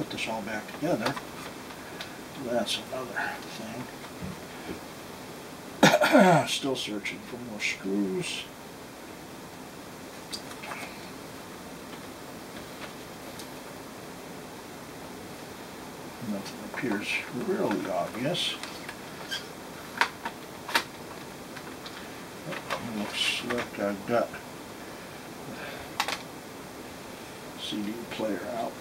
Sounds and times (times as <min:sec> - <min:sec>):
Speech: 0:00.0 - 0:01.2, 0:02.4 - 0:03.9, 0:06.4 - 0:08.5, 0:16.2 - 0:18.6, 0:22.5 - 0:24.4, 0:27.6 - 0:28.8
Inside, small room: 0:00.0 - 0:28.8.